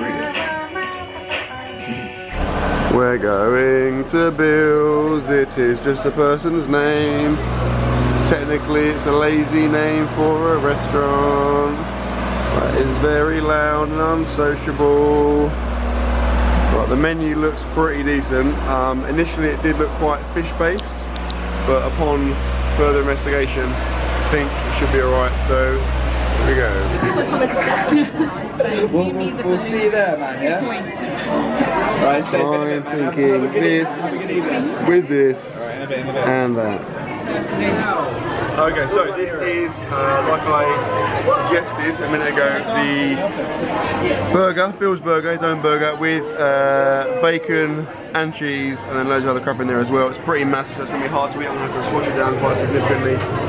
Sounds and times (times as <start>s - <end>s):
Outside, urban or manmade: 0.0s - 53.4s
Speech: 2.9s - 7.4s, 16.7s - 20.9s, 21.7s - 25.8s, 26.4s - 27.1s, 37.4s - 53.4s.